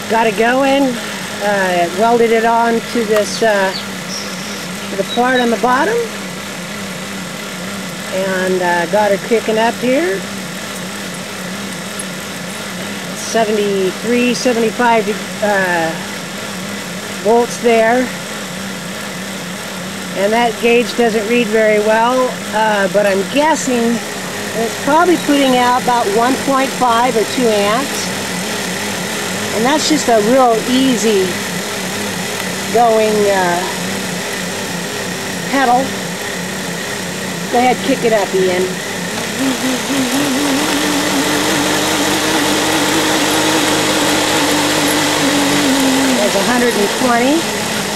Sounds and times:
Speech: 0:00.0 - 0:04.2, 0:04.9 - 0:06.1, 0:08.1 - 0:10.3, 0:13.2 - 0:16.1, 0:17.2 - 0:18.2, 0:20.2 - 0:24.0, 0:24.6 - 0:28.2, 0:29.5 - 0:31.4, 0:32.7 - 0:33.8, 0:35.5 - 0:36.0, 0:37.5 - 0:38.8, 0:45.8 - 0:47.5
Vehicle: 0:00.0 - 0:47.9.

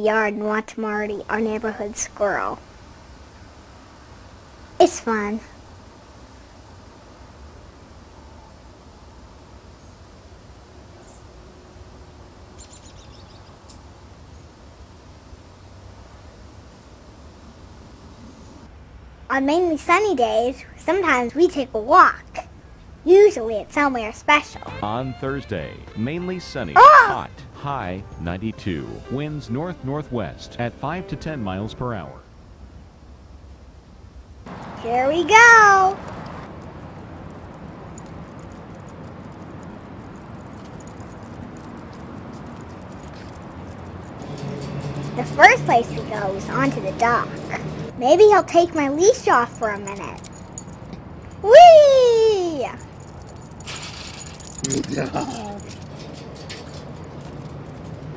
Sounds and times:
Speech: 0:00.0 - 0:02.6, 0:04.8 - 0:05.5, 0:23.1 - 0:32.2, 0:34.8 - 0:36.0, 0:45.2 - 0:50.2, 0:51.5 - 0:52.8, 0:54.7 - 0:55.7.

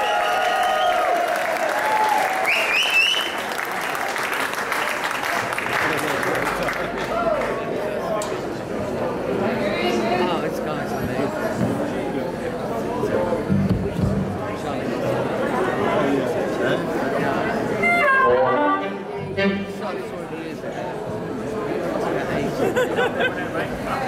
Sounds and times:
Speech: 0:05.6 - 0:24.0.

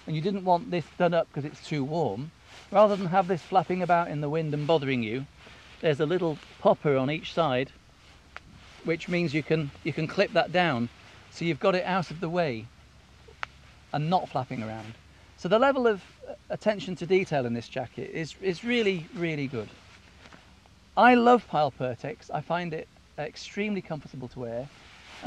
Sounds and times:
Speech: 0:00.0 - 0:07.8, 0:08.8 - 0:12.7, 0:14.0 - 0:19.8, 0:21.0 - 0:25.2.

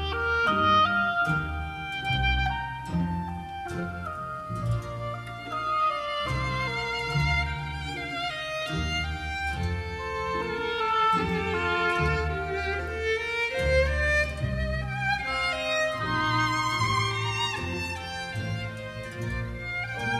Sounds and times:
Violin, fiddle: 0:00.0 - 0:20.2.

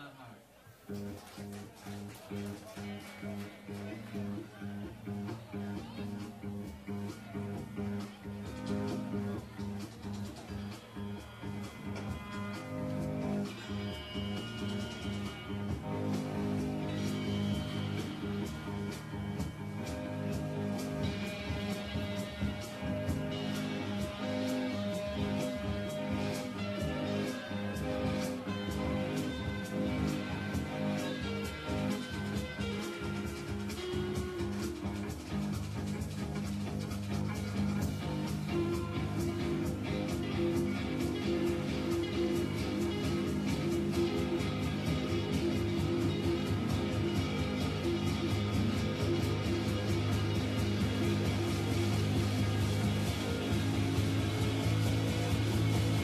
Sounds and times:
Music: 0:00.0 - 0:56.0.

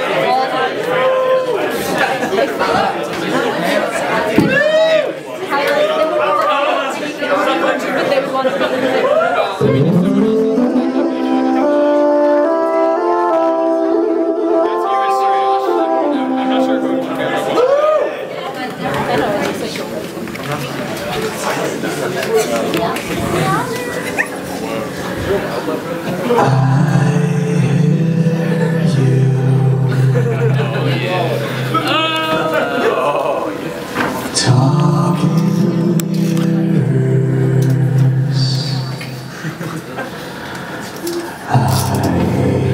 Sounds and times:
Music: 0:09.6 - 0:17.6, 0:26.4 - 0:31.8, 0:41.6 - 0:42.7.

